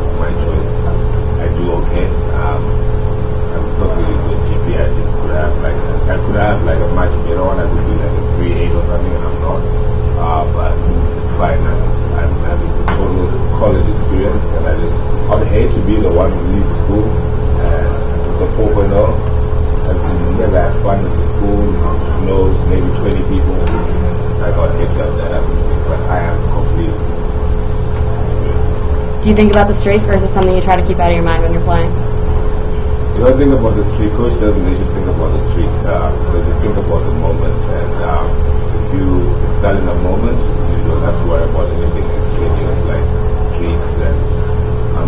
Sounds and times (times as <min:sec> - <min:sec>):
Speech: 0:00.0 - 0:02.8, 0:03.5 - 0:27.0, 0:28.0 - 0:32.0, 0:33.1 - 0:44.4.